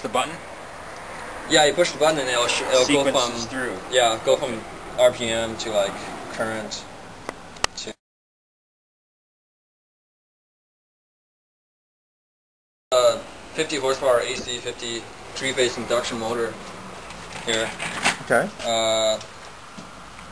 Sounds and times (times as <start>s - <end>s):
Speech: 0.0s - 0.4s, 1.5s - 6.9s, 7.8s - 8.0s, 13.0s - 16.6s, 17.5s - 19.3s.